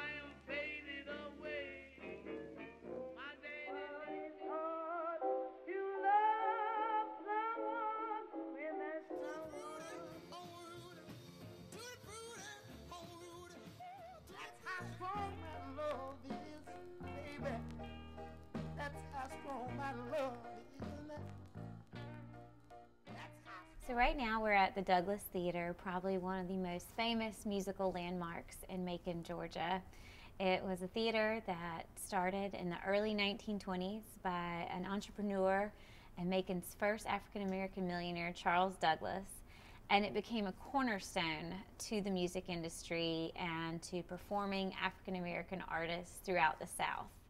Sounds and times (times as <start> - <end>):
Female speech, woman speaking: 23.8 - 47.2.